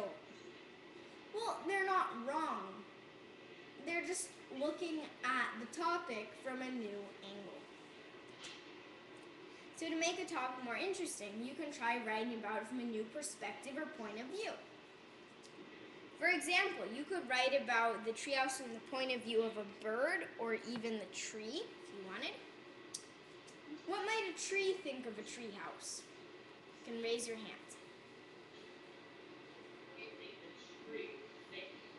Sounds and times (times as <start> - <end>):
Speech: 1.4 - 2.8, 3.8 - 7.7, 9.8 - 14.7, 16.2 - 22.5, 23.7 - 26.1, 26.9 - 27.8, 29.9 - 31.9.